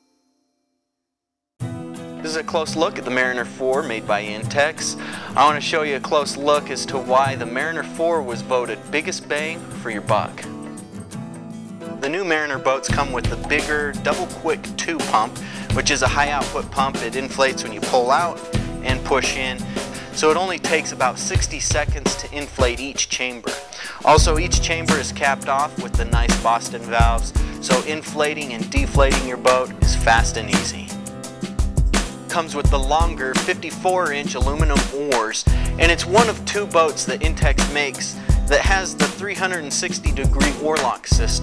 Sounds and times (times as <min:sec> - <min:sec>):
Music: 0:01.6 - 0:41.4
Speech: 0:02.2 - 0:10.5, 0:12.0 - 0:31.0, 0:32.3 - 0:41.4.